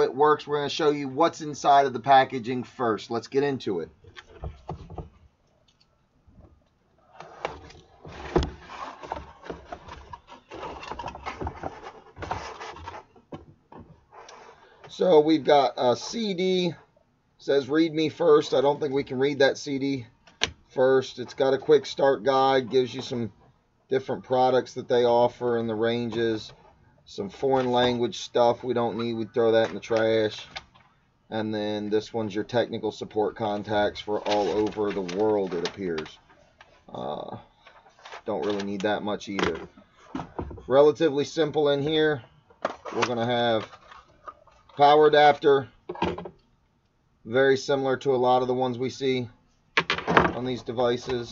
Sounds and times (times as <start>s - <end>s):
Speech: 0.0s - 4.0s, 14.9s - 20.1s, 20.8s - 30.6s, 31.3s - 36.2s, 36.9s - 37.5s, 38.2s - 39.7s, 40.7s - 42.3s, 42.9s - 43.7s, 44.8s - 45.8s, 47.3s - 49.4s, 50.2s - 51.3s.